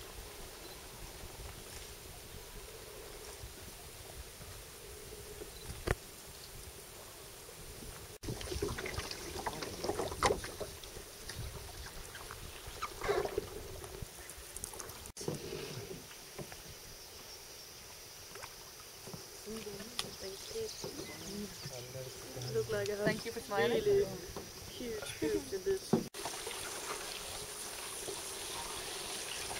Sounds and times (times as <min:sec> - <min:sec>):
Rowboat, canoe, kayak: 0:00.0 - 0:29.6.